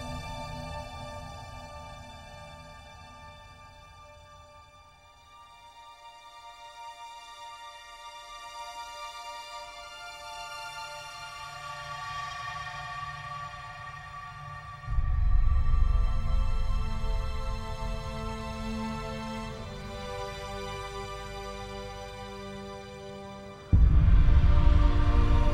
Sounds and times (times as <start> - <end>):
Music: 0.0 - 25.5.